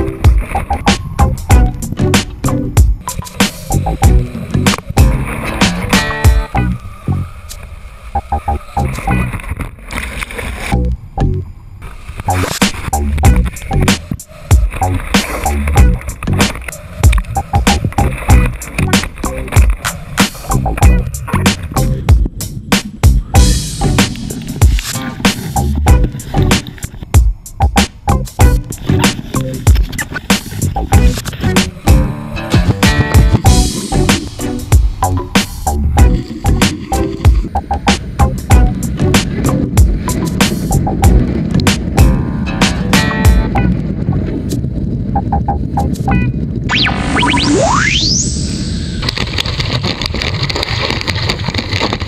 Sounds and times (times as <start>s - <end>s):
Music: 0.0s - 7.3s, 8.2s - 9.4s, 10.8s - 11.4s, 12.3s - 44.6s, 45.2s - 47.5s.